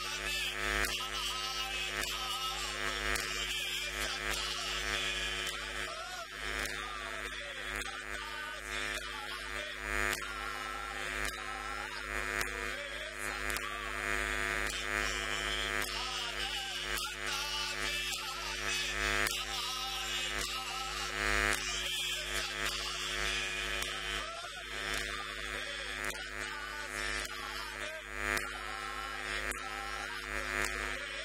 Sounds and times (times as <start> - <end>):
Hum: 0.0 - 31.2.